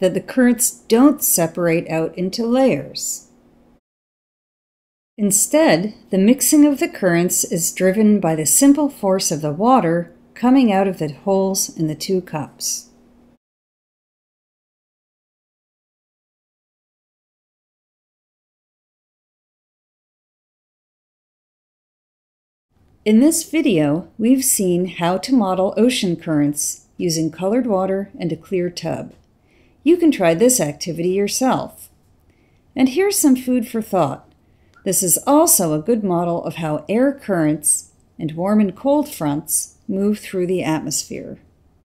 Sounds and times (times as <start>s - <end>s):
Speech: 0.0s - 3.3s, 5.2s - 12.9s, 23.1s - 29.2s, 29.9s - 31.9s, 32.8s - 41.5s.